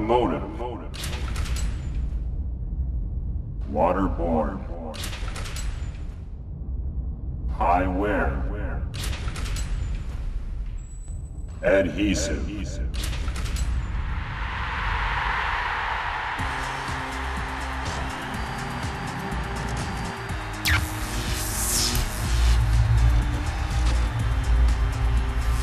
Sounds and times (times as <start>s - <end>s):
Music: 16.3s - 25.6s.